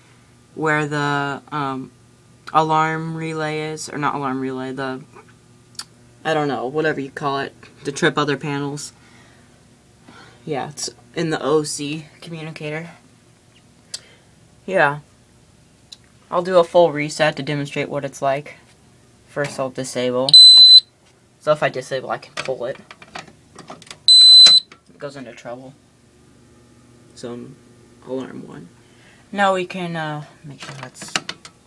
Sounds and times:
Speech: 0.6s - 1.9s, 2.5s - 5.1s, 6.2s - 9.0s, 10.4s - 13.0s, 14.7s - 15.1s, 16.3s - 18.7s, 19.3s - 20.3s, 21.4s - 22.8s, 24.9s - 25.8s, 27.2s - 31.2s
Fire alarm: 20.3s - 20.9s, 24.1s - 24.7s.

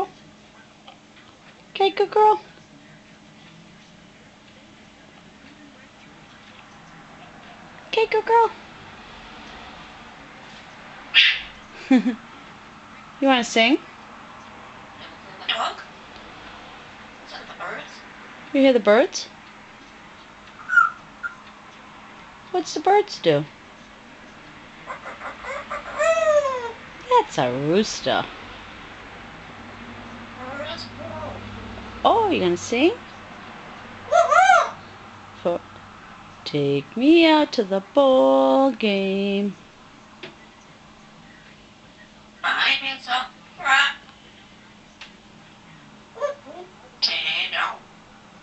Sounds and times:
Speech: 1.7s - 8.6s, 17.3s - 19.3s, 32.1s - 33.0s, 36.5s - 39.6s.

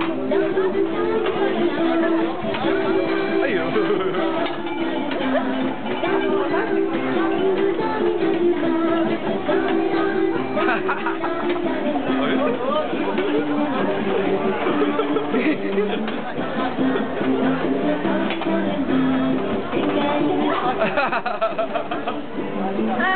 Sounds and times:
Music: 0.0s - 23.1s.

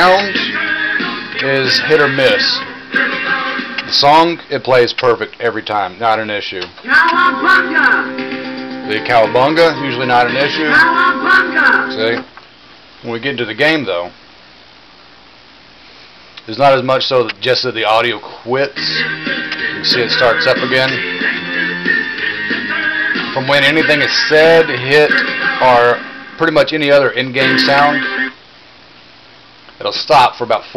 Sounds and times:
Music: 0.0s - 4.1s, 6.9s - 12.2s, 18.8s - 28.4s
Speech: 1.4s - 2.6s, 3.9s - 6.8s, 8.9s - 10.8s, 12.0s - 12.3s, 13.0s - 14.2s, 16.4s - 18.8s, 23.4s - 28.0s, 29.8s - 30.7s.

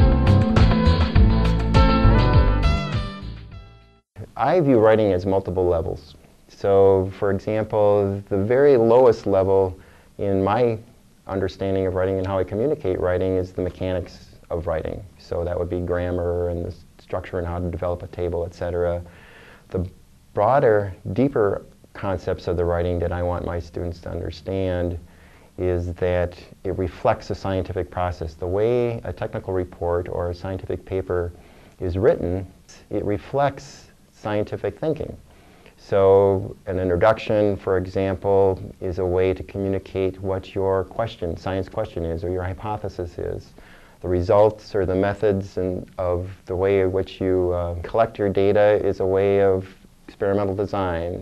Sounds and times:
Speech: 4.2s - 35.2s, 35.8s - 51.2s.

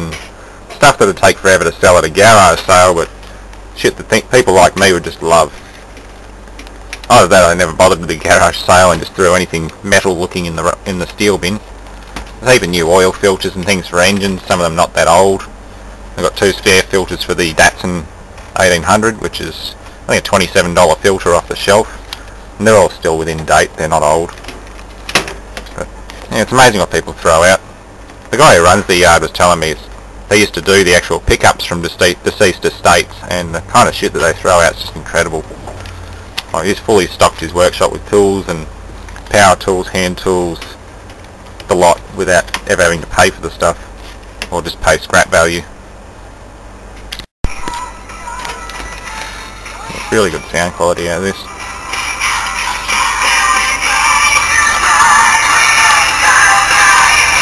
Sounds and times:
Speech: 0.0s - 0.2s, 0.8s - 3.1s, 3.8s - 5.6s, 7.1s - 11.6s, 12.4s - 15.5s, 16.2s - 22.0s, 22.6s - 24.4s, 25.7s - 27.6s, 28.3s - 35.6s, 36.5s - 38.7s, 39.3s - 40.8s, 41.7s - 43.8s, 44.5s - 45.7s, 49.8s - 51.5s
Music: 47.5s - 57.4s.

